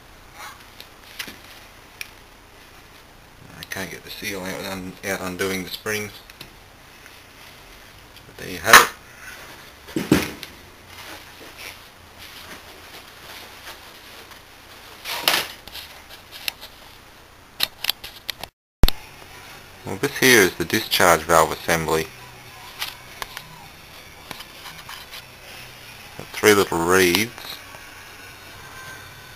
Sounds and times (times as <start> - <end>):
Speech: 3.4 - 6.2, 8.3 - 9.0, 19.8 - 23.7, 26.2 - 27.6.